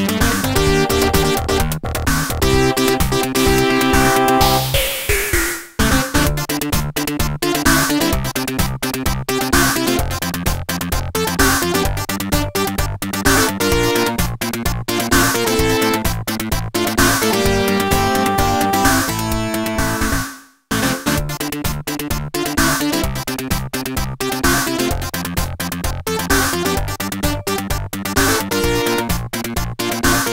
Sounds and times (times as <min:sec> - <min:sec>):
Rhythm and blues: 0:00.0 - 0:30.3
Theme music: 0:02.6 - 0:06.1, 0:17.1 - 0:20.0.